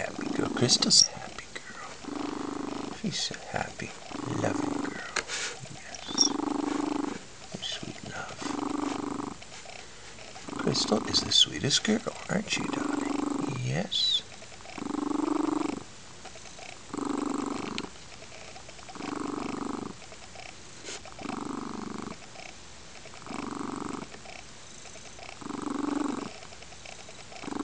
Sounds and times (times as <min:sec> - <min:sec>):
Purr: 0:00.0 - 0:27.6.